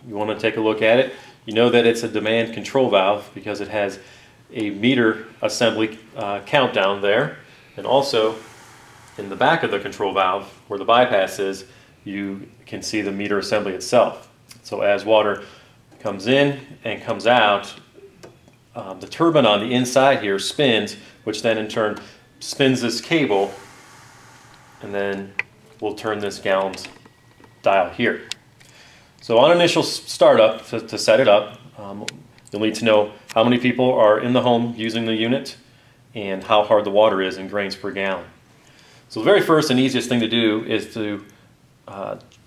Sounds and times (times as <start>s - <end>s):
Speech: 0.0s - 8.4s, 9.2s - 17.9s, 18.8s - 23.6s, 24.8s - 27.0s, 27.6s - 28.3s, 29.2s - 38.4s, 39.1s - 42.3s.